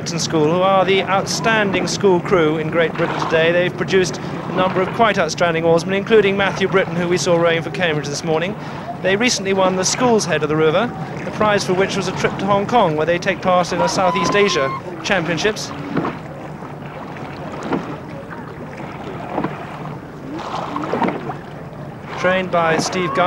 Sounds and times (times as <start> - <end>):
Rowboat, canoe, kayak: 0.0 - 23.2.